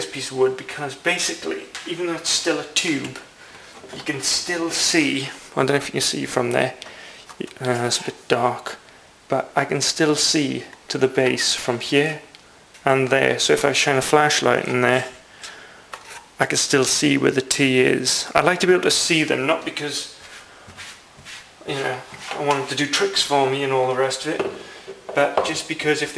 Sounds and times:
Speech: 0.0 - 3.3, 3.9 - 6.8, 7.4 - 15.2, 16.4 - 20.2, 21.6 - 26.1
Inside, small room: 0.0 - 26.1.

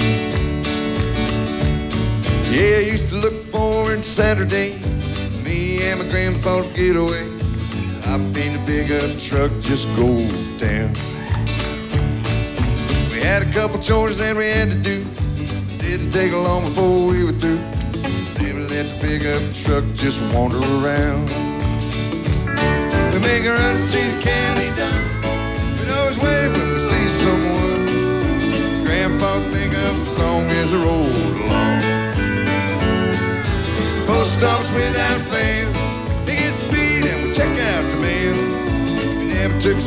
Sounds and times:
Music: 0.0 - 39.8.

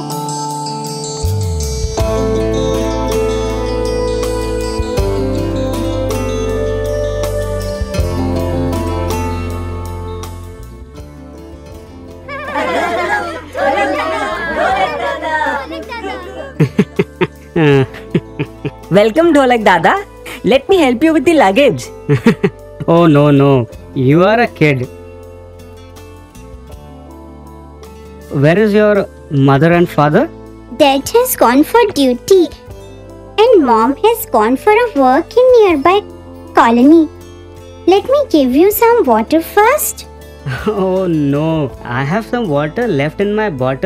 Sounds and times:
Music: 0.0 - 43.8.

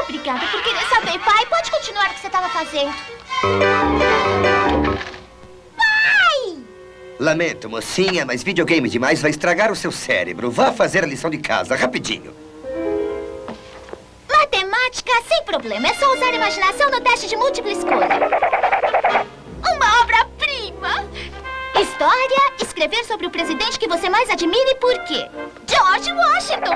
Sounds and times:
Music: 0.0 - 14.1, 15.7 - 26.7.

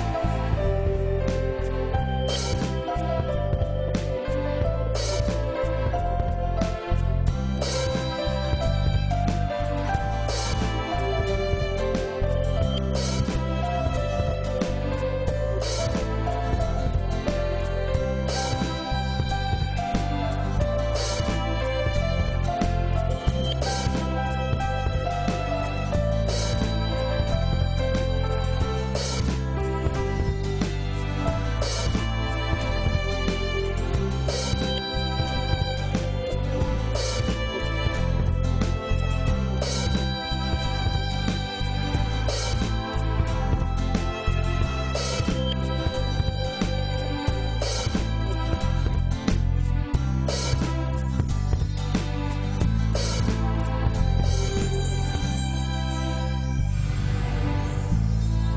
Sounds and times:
Orchestra: 0.0 - 58.5.

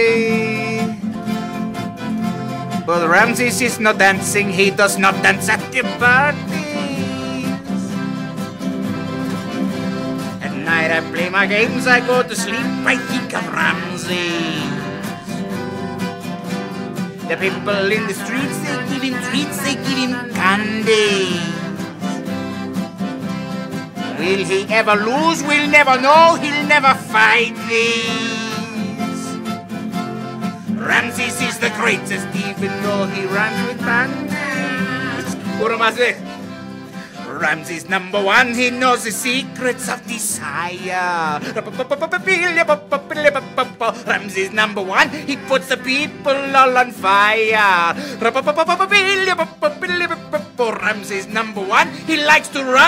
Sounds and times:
Male singing: 0.0 - 1.0, 2.9 - 7.9, 10.4 - 15.3, 17.2 - 22.1, 24.1 - 29.4, 30.8 - 36.2, 37.3 - 52.8
Music: 0.0 - 52.8.

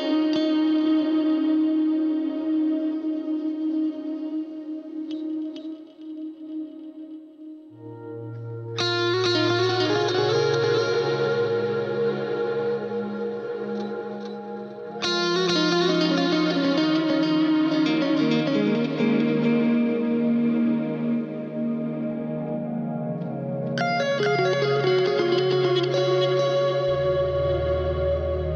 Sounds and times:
Electric guitar: 0.0 - 28.5.

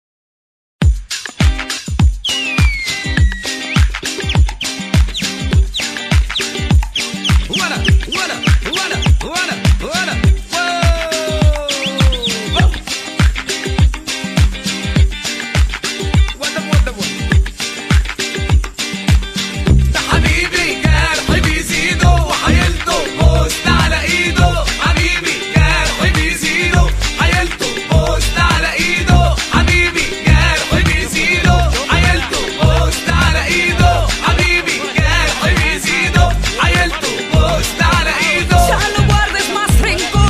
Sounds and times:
Disco: 0.8 - 40.2.

